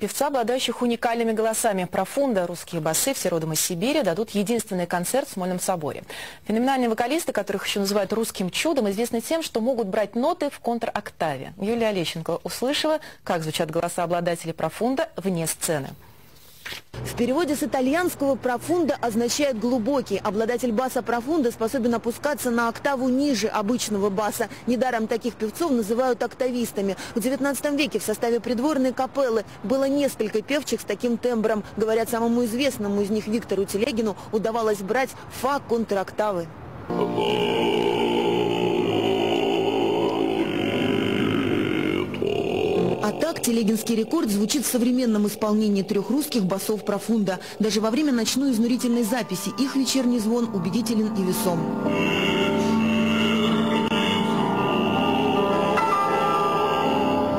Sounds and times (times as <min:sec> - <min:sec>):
Speech: 0:00.0 - 0:16.0, 0:17.1 - 0:36.5, 0:40.0 - 0:51.7.